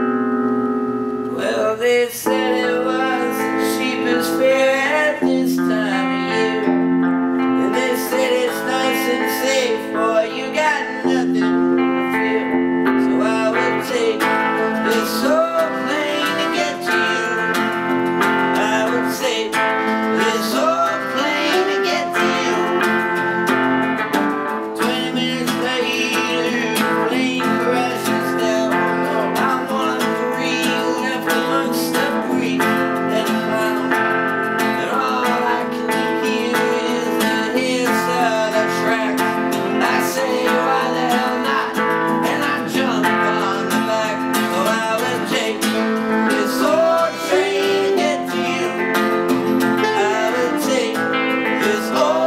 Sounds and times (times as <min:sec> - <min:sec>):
Music: 0:00.0 - 0:52.2.